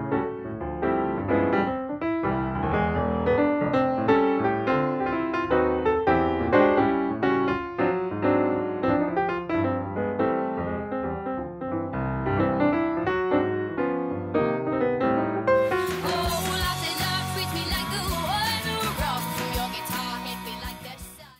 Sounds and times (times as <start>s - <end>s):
Music: 0.0s - 21.3s.